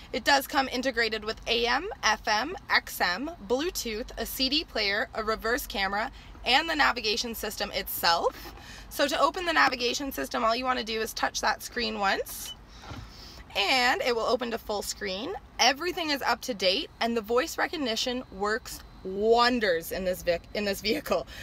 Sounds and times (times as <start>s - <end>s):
Speech: 0.2s - 8.3s, 9.0s - 12.5s, 13.6s - 21.2s.